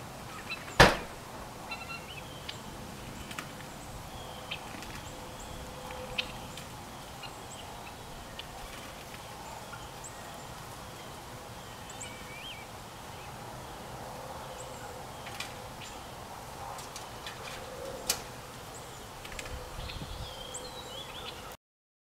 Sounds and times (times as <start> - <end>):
Bird: 0.3 - 21.6.